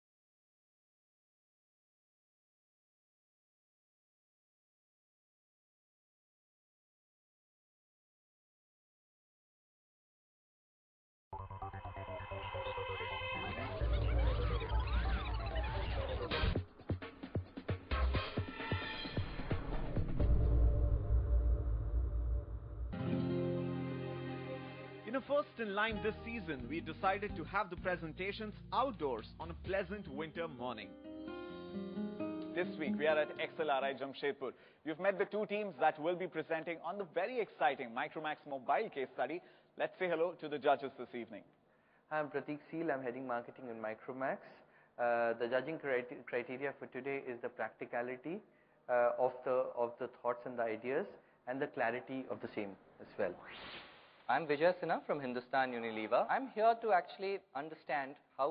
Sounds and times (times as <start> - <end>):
Music: 11.4 - 34.2
Speech: 25.1 - 30.9, 32.6 - 41.5, 42.1 - 53.4, 54.3 - 58.5.